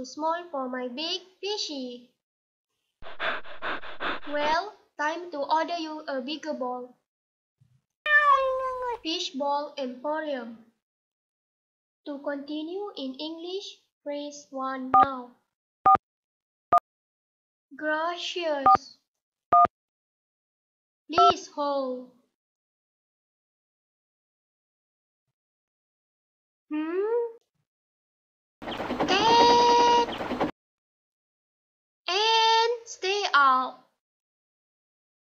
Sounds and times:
Speech: 0.0 - 2.1, 4.3 - 7.0, 8.3 - 10.7, 12.1 - 15.4, 17.8 - 19.0, 21.1 - 22.1, 29.1 - 30.0, 32.1 - 33.9.

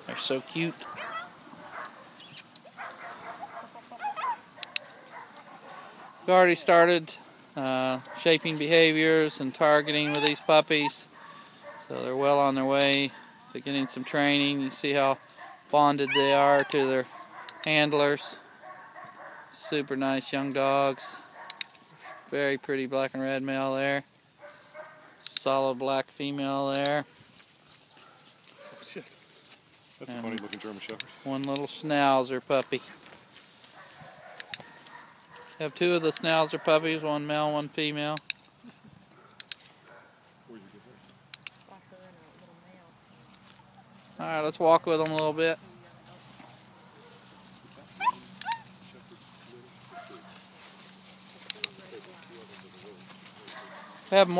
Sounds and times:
Dog: 0.8 - 6.3, 9.9 - 11.9, 14.7 - 17.8, 18.4 - 19.9, 21.2 - 22.4, 24.4 - 25.2, 28.0 - 29.0, 33.8 - 35.8, 39.1 - 40.2, 48.0 - 48.7, 49.9 - 50.4, 52.5 - 54.2.

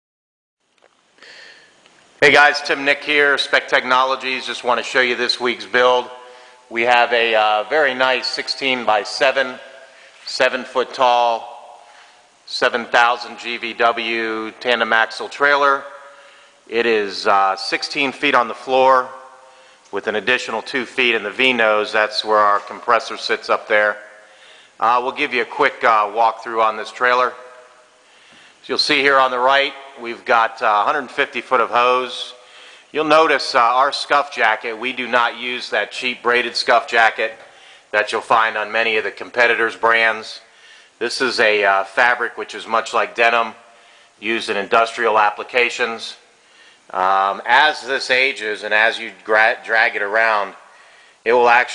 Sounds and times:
Speech: 2.2 - 11.9, 12.5 - 16.1, 16.7 - 19.2, 19.9 - 24.2, 24.8 - 27.6, 28.6 - 46.2, 46.9 - 51.7.

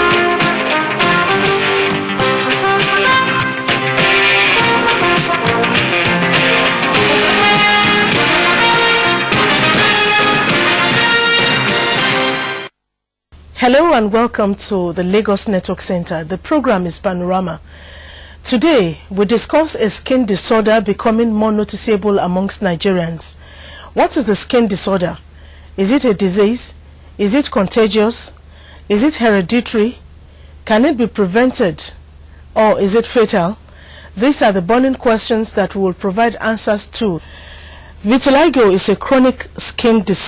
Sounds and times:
Speech: 13.6 - 17.6, 18.4 - 23.4, 24.0 - 25.2, 25.8 - 30.0, 30.7 - 32.0, 32.6 - 33.6, 34.2 - 37.2, 38.0 - 40.2.

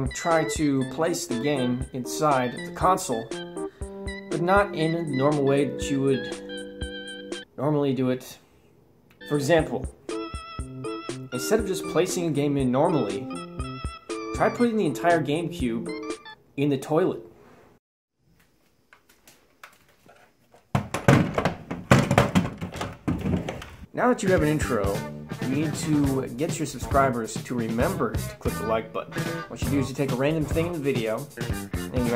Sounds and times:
Speech: 0.0 - 3.3, 4.3 - 6.4, 7.6 - 8.5, 9.2 - 9.9, 11.4 - 13.3, 14.4 - 16.0, 16.6 - 17.3, 23.9 - 32.1
Music: 0.0 - 7.5, 9.2 - 16.4, 24.0 - 32.1.

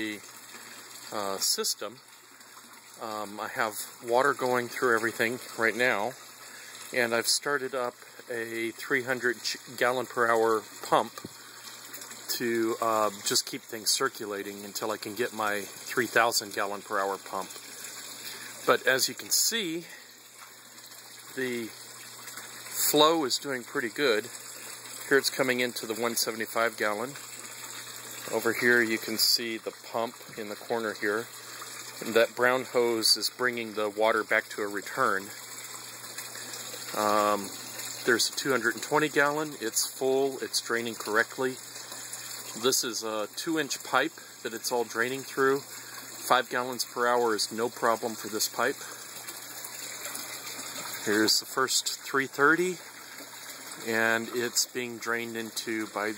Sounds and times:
Bathtub (filling or washing): 0.0 - 56.1
Water: 0.0 - 56.1
Water tap, faucet: 0.0 - 56.1.

